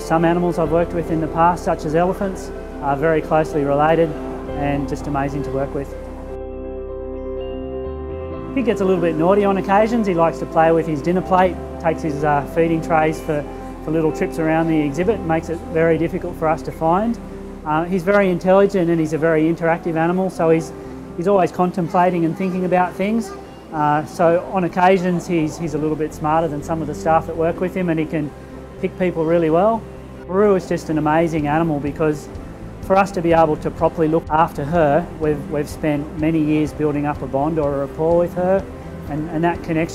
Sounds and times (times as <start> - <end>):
Speech: 0.0 - 5.9, 8.6 - 32.3, 32.9 - 39.9
Music: 0.0 - 39.9.